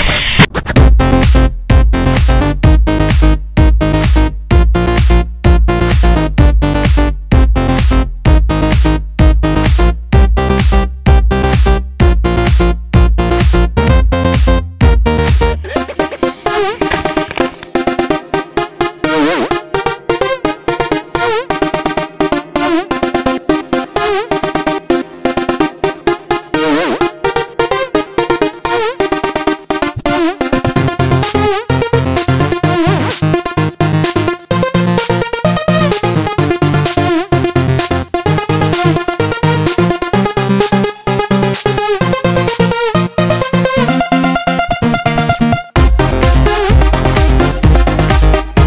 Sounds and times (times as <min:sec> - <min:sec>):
Music: 0:00.0 - 0:48.6.